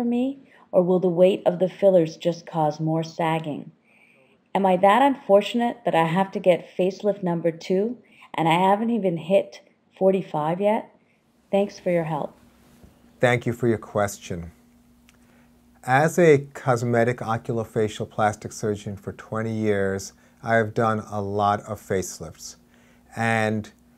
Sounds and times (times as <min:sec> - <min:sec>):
Conversation: 0:00.0 - 0:23.8.